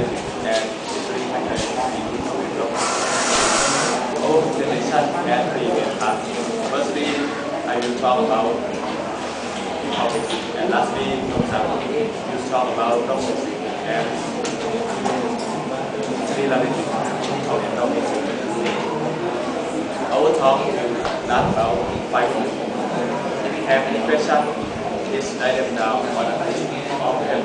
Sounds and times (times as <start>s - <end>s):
Speech: 0.0s - 2.8s, 4.1s - 9.1s, 9.7s - 27.4s.